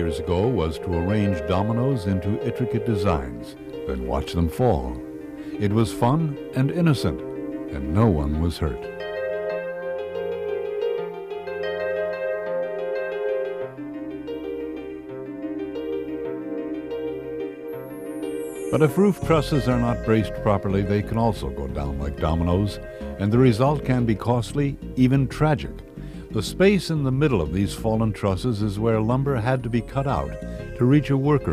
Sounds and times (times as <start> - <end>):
Speech: 0.0 - 5.0, 5.6 - 8.9, 18.7 - 31.5
Music: 0.0 - 31.5.